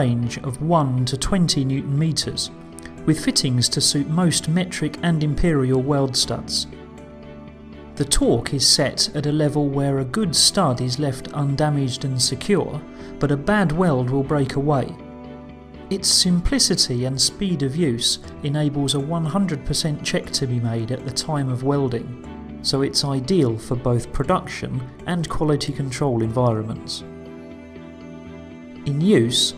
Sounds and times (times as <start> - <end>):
Speech: 0.0 - 6.7, 8.0 - 15.0, 15.9 - 27.1, 28.9 - 29.5
Music: 0.0 - 29.5.